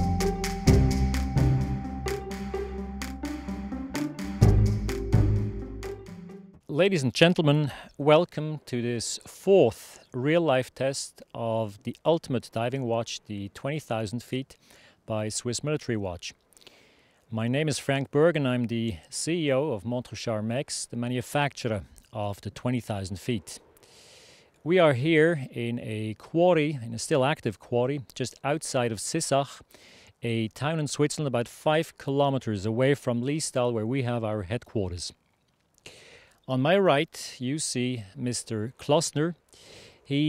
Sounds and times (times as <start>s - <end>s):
Speech: 6.7s - 16.4s, 17.3s - 23.6s, 24.7s - 29.6s, 30.2s - 35.2s, 36.5s - 39.4s, 40.1s - 40.2s.